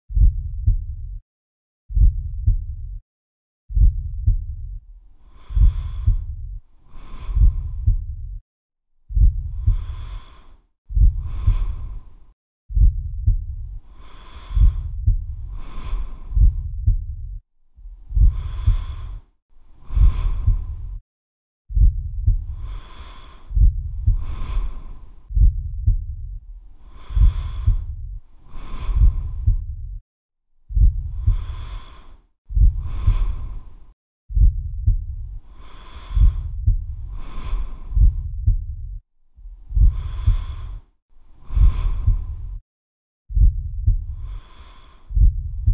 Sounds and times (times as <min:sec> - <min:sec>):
Breathing: 0:05.1 - 0:08.1, 0:09.1 - 0:12.4, 0:13.7 - 0:16.7, 0:17.9 - 0:21.0, 0:22.2 - 0:25.4, 0:26.6 - 0:30.0, 0:30.7 - 0:34.0, 0:35.3 - 0:38.3, 0:39.6 - 0:42.6, 0:43.9 - 0:45.7.